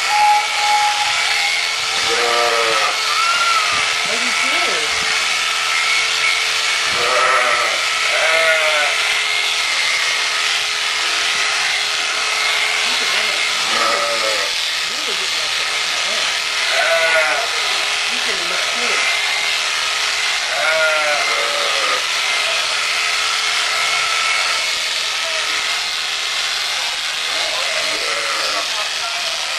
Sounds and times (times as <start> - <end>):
Bleat: 1.2 - 3.8, 6.9 - 9.1, 13.6 - 14.6, 16.7 - 17.8, 20.4 - 22.8, 27.4 - 28.8
Speech: 4.0 - 5.0, 12.9 - 13.8, 14.8 - 16.3, 18.1 - 19.1.